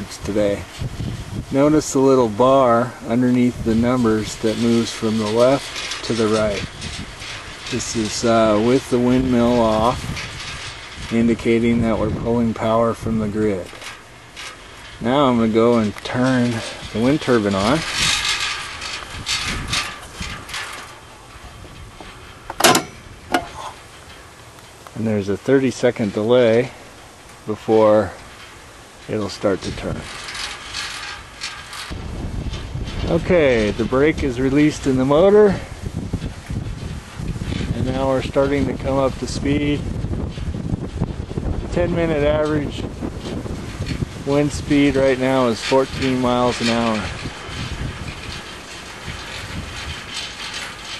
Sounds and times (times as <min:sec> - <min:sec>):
Wind noise (microphone): 0:00.0 - 0:13.7, 0:14.9 - 0:20.8, 0:29.2 - 0:51.0.